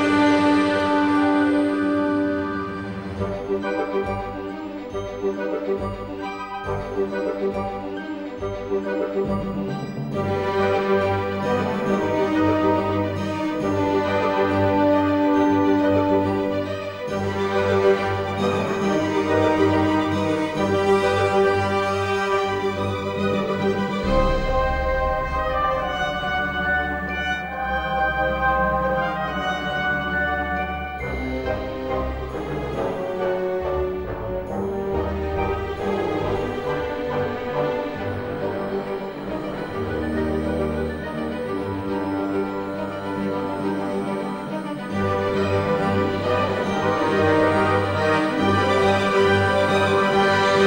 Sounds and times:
Music: 0.0 - 50.6.

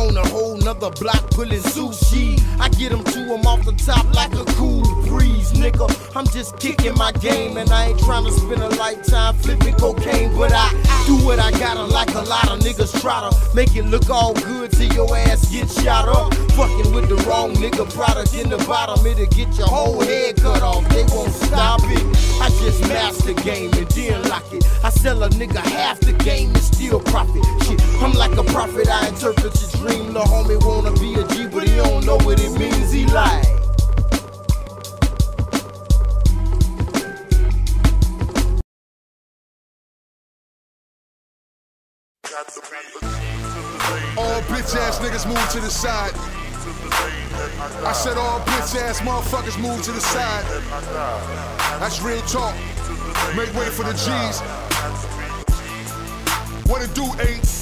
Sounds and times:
Rapping: 0.0 - 33.6, 42.2 - 57.6
Hip hop music: 0.0 - 38.6, 42.2 - 57.6.

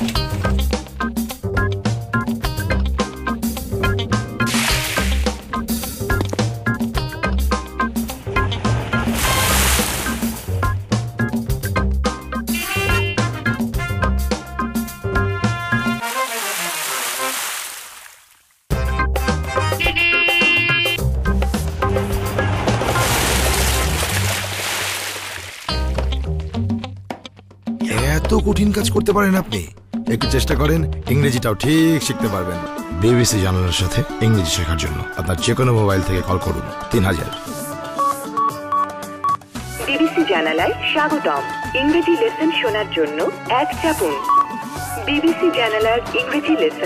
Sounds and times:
Music: 0.0 - 17.0, 18.7 - 46.8
Speech: 27.8 - 37.4, 39.8 - 44.3, 45.0 - 46.8.

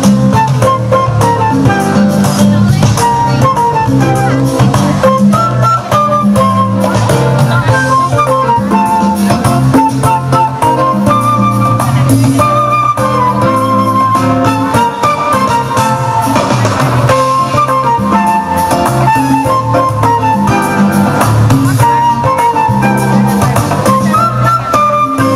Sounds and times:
Flute: 0.0 - 25.3
Speech: 1.9 - 10.6, 11.6 - 12.7, 21.5 - 25.3.

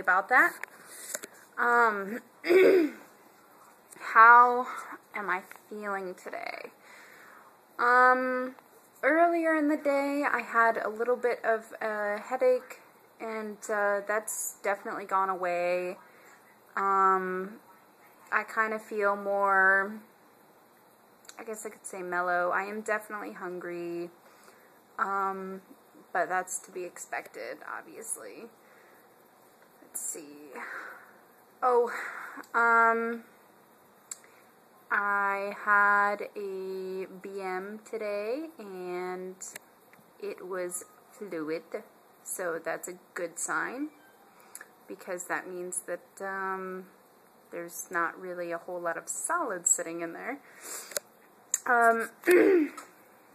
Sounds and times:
Speech: 1.6 - 2.2, 4.0 - 6.7, 7.8 - 16.0, 16.8 - 17.6, 18.3 - 20.0, 21.3 - 24.2, 25.0 - 28.5, 34.9 - 39.6, 44.9 - 46.9, 47.5 - 50.4, 51.6 - 52.3.

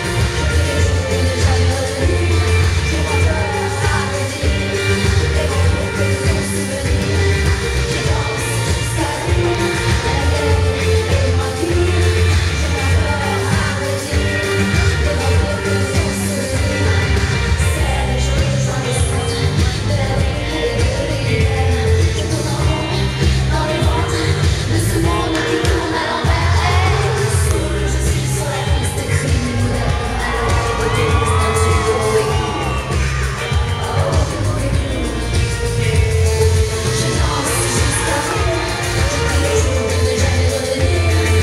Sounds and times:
Folk music: 0.0 - 41.4
Funk: 0.0 - 41.4
Pop music: 0.0 - 41.4.

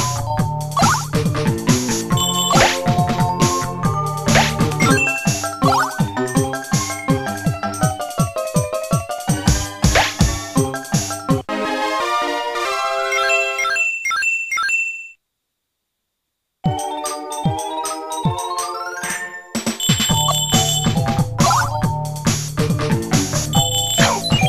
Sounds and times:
Video game music: 0.0 - 14.0, 16.7 - 24.4.

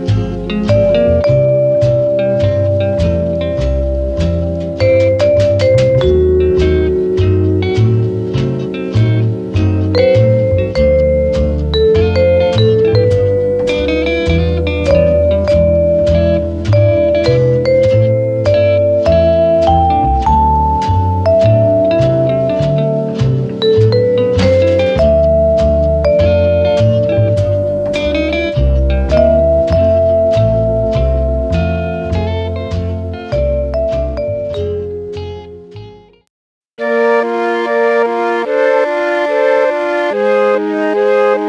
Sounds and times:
Electric piano: 0.0 - 36.0.

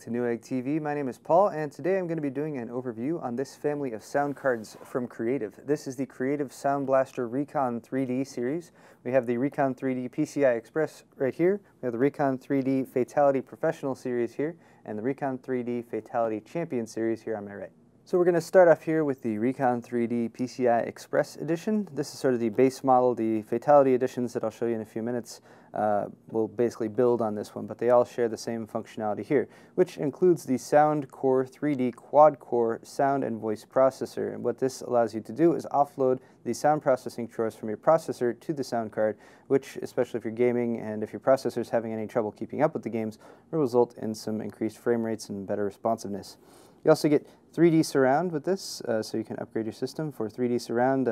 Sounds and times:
Speech: 0.0 - 51.1.

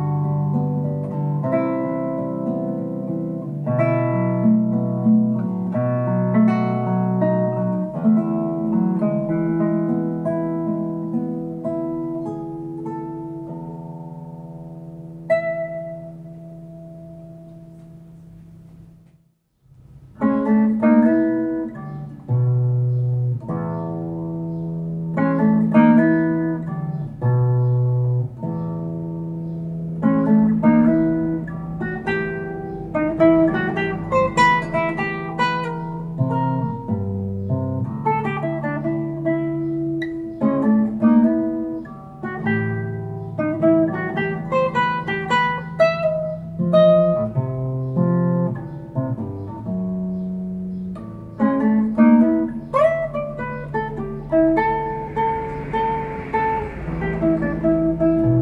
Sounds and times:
Strum: 0.0 - 58.4.

